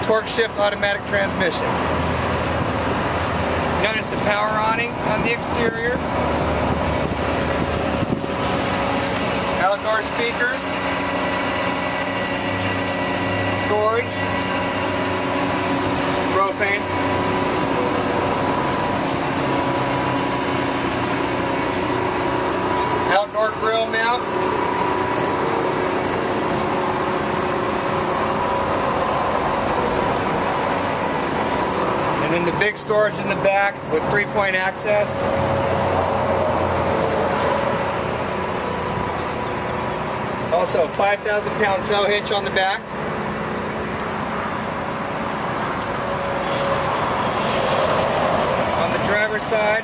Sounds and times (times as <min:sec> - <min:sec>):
Speech: 0:00.0 - 0:01.7, 0:03.8 - 0:06.0, 0:09.6 - 0:10.8, 0:13.6 - 0:14.2, 0:16.3 - 0:16.9, 0:23.1 - 0:24.3, 0:32.2 - 0:35.1, 0:40.5 - 0:42.9, 0:48.8 - 0:49.8.